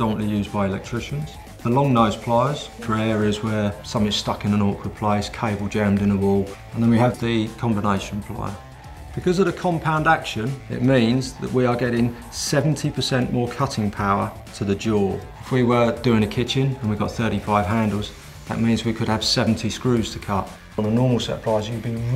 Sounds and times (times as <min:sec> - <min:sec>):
Speech: 0:00.0 - 0:08.6, 0:09.2 - 0:22.1
Music: 0:00.0 - 0:22.1.